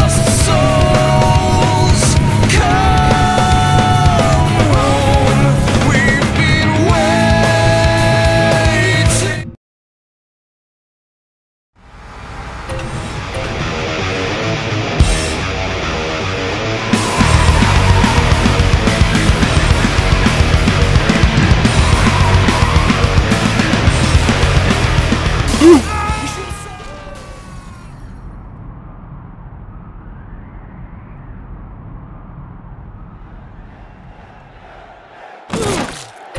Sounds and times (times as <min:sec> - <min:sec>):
Music: 0:00.0 - 0:09.6, 0:12.6 - 0:28.5.